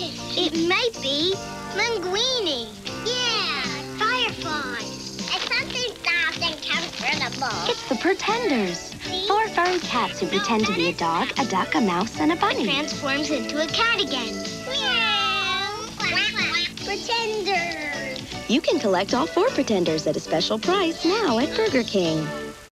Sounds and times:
Music: 0.0 - 22.7
Speech: 18.5 - 22.3.

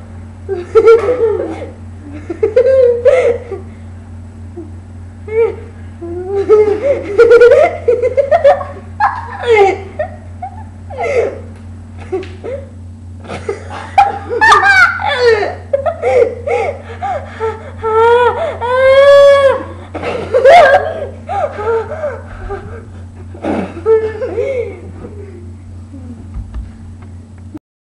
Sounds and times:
Laughter: 0.5 - 3.7, 6.3 - 11.4, 12.0 - 18.9, 19.9 - 22.8, 23.4 - 25.5.

